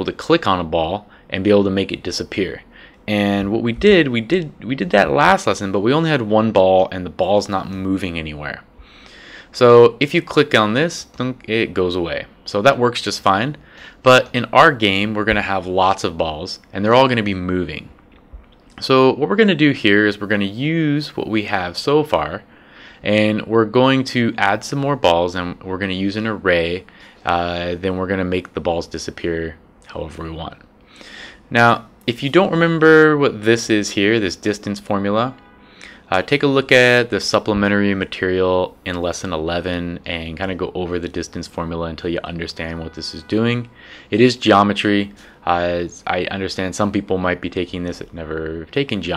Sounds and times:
Speech: 0:00.0 - 0:08.7, 0:09.5 - 0:18.0, 0:18.8 - 0:30.7, 0:31.5 - 0:35.4, 0:36.0 - 0:49.1.

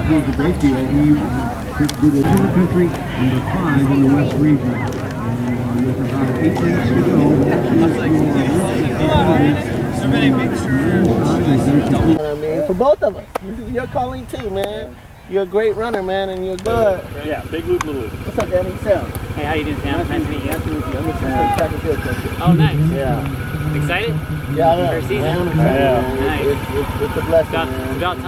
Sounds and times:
Outside, urban or manmade: 0:00.0 - 0:28.2
Speech: 0:00.0 - 0:28.2.

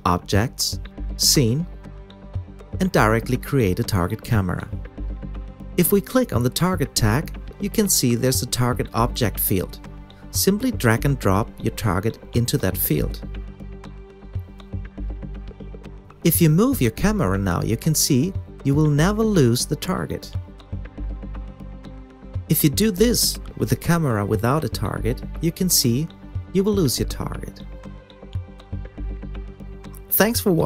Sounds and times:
Speech: 0:00.0 - 0:01.7, 0:02.8 - 0:04.8, 0:05.8 - 0:13.2, 0:16.3 - 0:20.4, 0:22.5 - 0:27.6, 0:30.0 - 0:30.6.

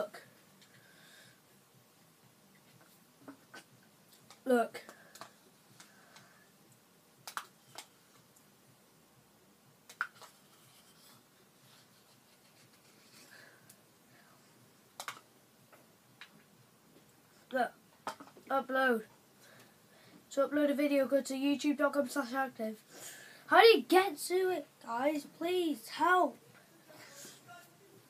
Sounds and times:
Speech: 0:18.5 - 0:19.1, 0:20.3 - 0:22.8, 0:23.5 - 0:28.0.

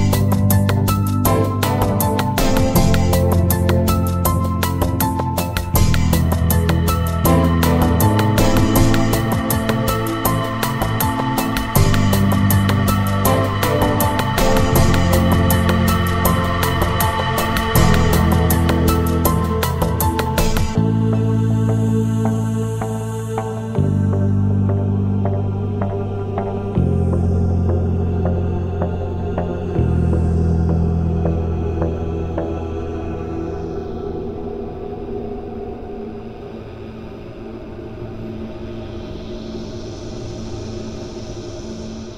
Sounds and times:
Music: 0:00.0 - 0:42.1.

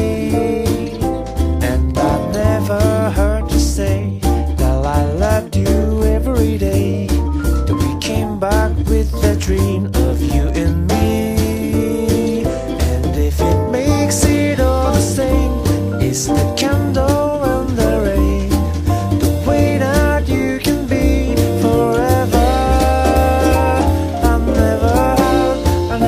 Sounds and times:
Music: 0:00.0 - 0:26.0.

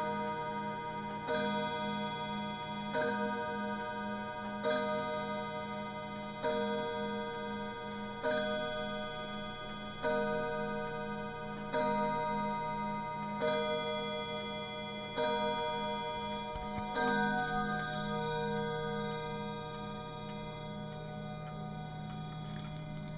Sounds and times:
Chime: 0:00.0 - 0:23.1.

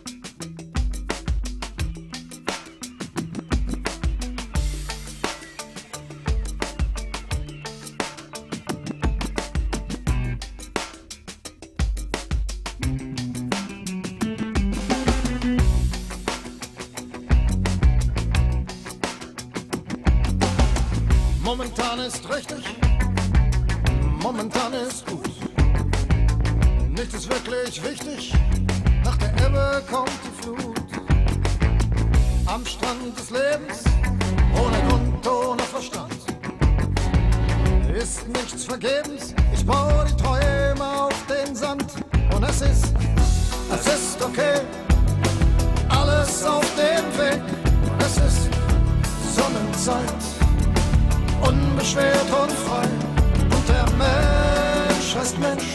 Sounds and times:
Music: 0:00.0 - 0:55.7.

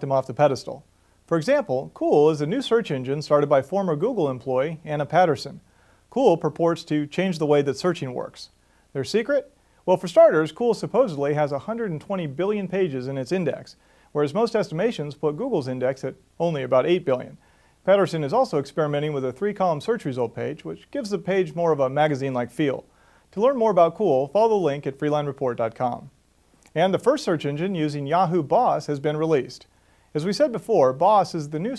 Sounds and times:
Speech: 0:00.0 - 0:31.7.

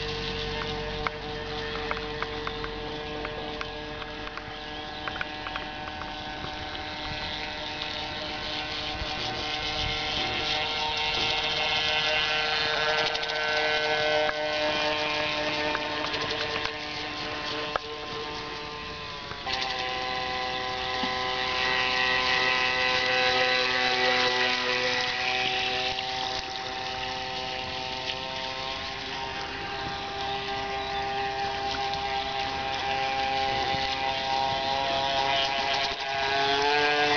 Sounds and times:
Motorboat, speedboat: 0:00.0 - 0:37.1.

